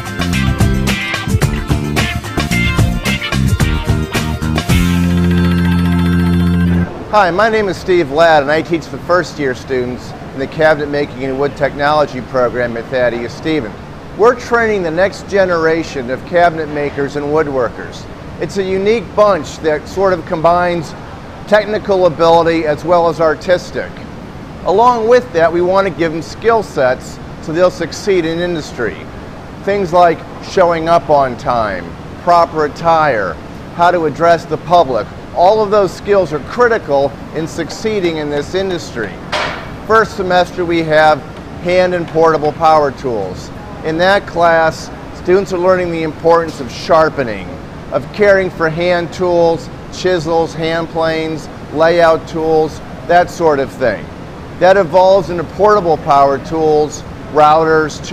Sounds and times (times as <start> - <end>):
Speech: 7.1 - 24.0, 24.6 - 39.2, 39.9 - 58.1.